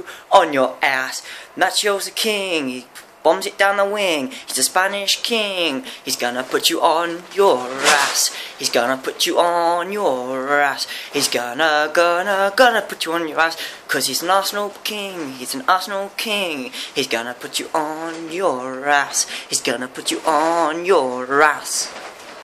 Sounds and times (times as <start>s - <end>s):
Speech: 0.0s - 21.9s.